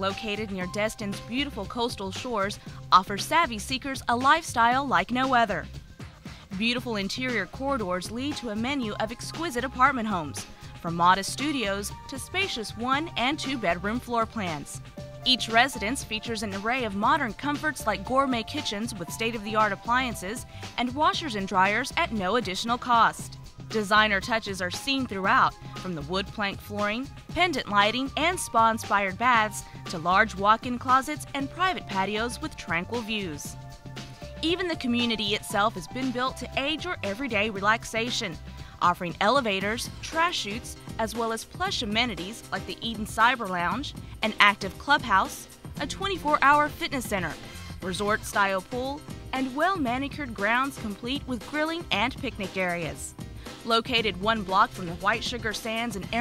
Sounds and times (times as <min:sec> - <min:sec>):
Speech: 0:00.0 - 0:05.7, 0:06.4 - 0:33.6, 0:34.4 - 0:56.2
Music: 0:00.0 - 0:56.2.